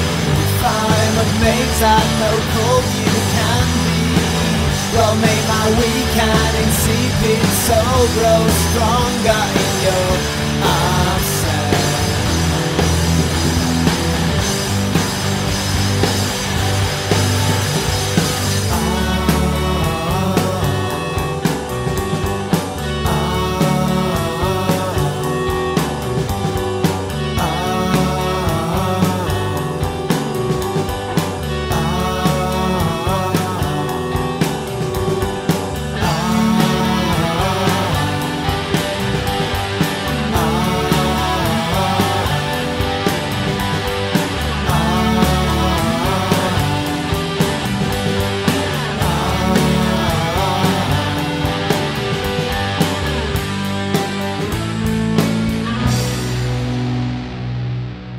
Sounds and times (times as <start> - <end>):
Progressive rock: 0.0 - 58.1.